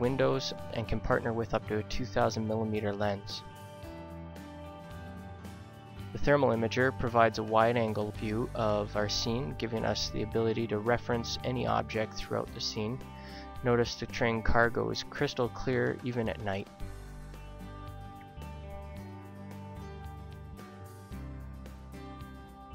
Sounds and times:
Speech: 0.0s - 3.5s, 6.2s - 13.0s, 13.6s - 16.7s
Music: 0.0s - 22.7s.

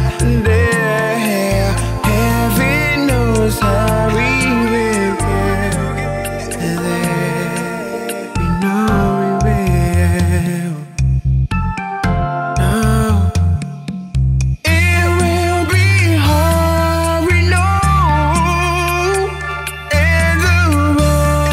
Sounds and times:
Jazz: 0.0s - 21.5s
Music of Africa: 0.0s - 21.5s.

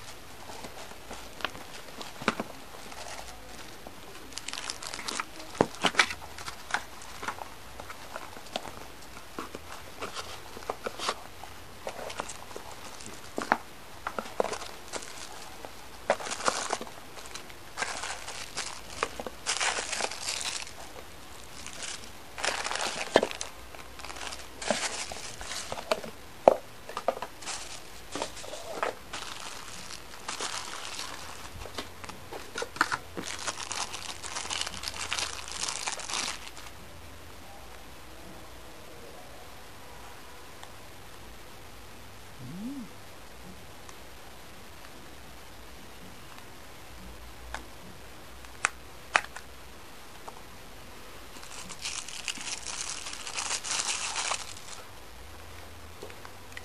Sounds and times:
Crumpling, crinkling: 0.0s - 36.7s, 51.3s - 54.9s.

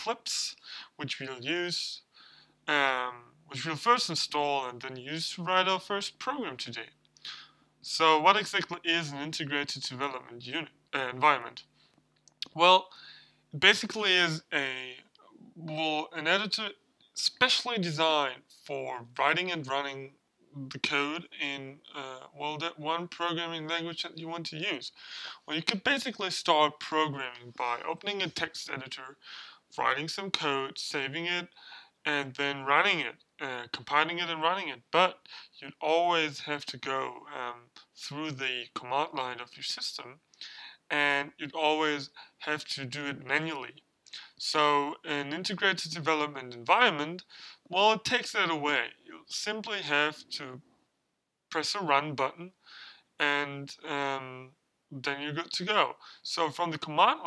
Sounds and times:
Speech: 0.0s - 2.1s, 2.7s - 11.7s, 12.4s - 50.6s, 51.5s - 52.6s, 53.2s - 57.2s.

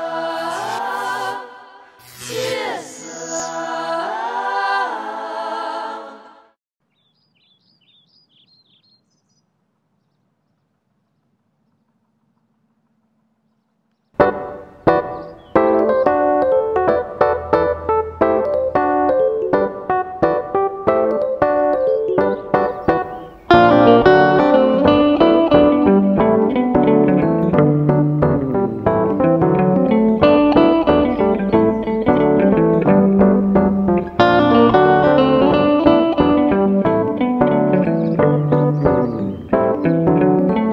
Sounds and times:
Guitar: 14.2s - 40.7s.

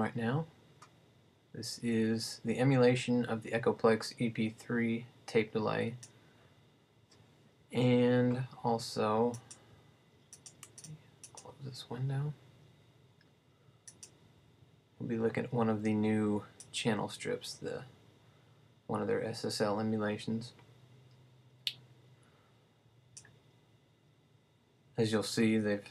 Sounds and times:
Speech: 0.0s - 0.5s, 1.6s - 6.0s, 7.7s - 9.4s, 11.4s - 12.4s, 15.0s - 17.9s, 18.9s - 20.6s, 25.0s - 25.9s.

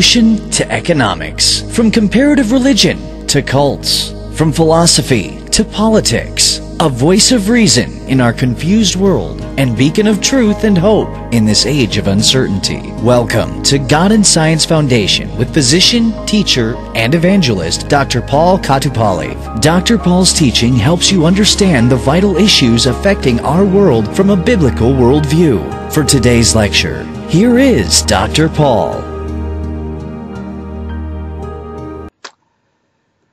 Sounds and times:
Speech: 0.0s - 29.2s
Music: 0.0s - 32.2s.

